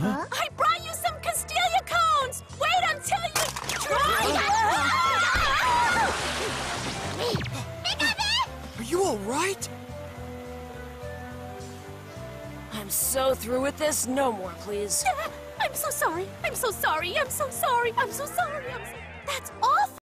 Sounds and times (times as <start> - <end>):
Music: 0.0 - 20.0
Speech: 12.7 - 20.0.